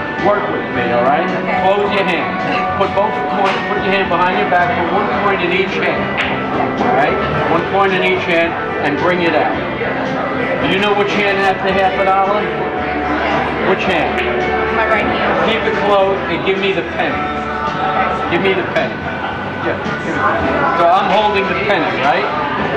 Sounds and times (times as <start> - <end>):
Music: 0.0 - 22.7
Speech: 0.2 - 6.1, 13.6 - 17.2, 19.6 - 22.4.